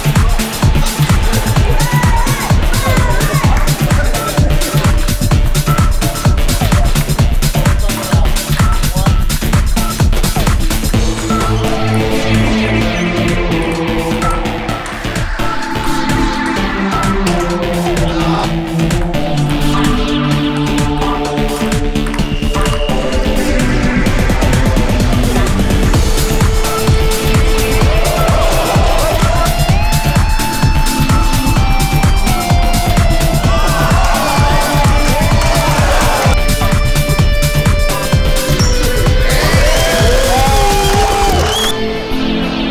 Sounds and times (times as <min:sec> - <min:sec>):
Music: 0:00.0 - 0:42.7.